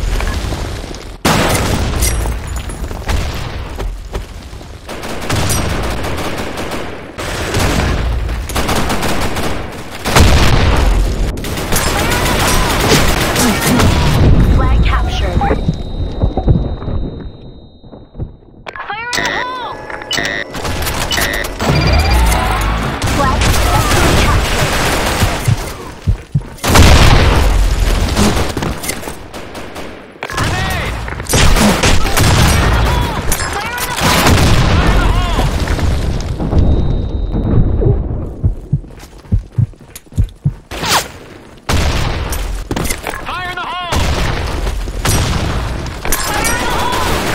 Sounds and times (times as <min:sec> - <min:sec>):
Fusillade: 0:04.9 - 0:14.2, 0:23.0 - 0:25.8, 0:46.5 - 0:47.3.